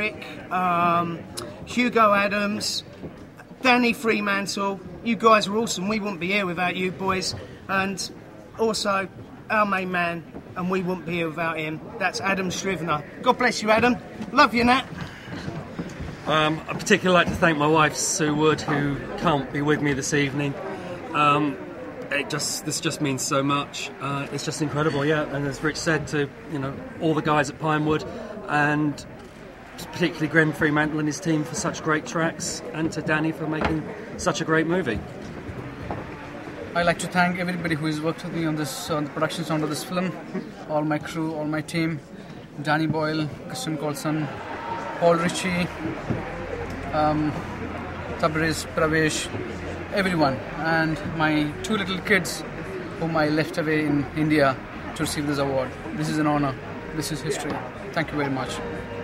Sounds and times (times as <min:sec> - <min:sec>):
Male speech, man speaking: 0:00.0 - 0:02.9, 0:03.6 - 0:15.0, 0:16.3 - 0:29.1, 0:29.8 - 0:35.0, 0:36.8 - 0:42.0, 0:42.6 - 0:44.4, 0:45.0 - 0:45.8, 0:46.9 - 0:47.4, 0:48.2 - 0:58.8.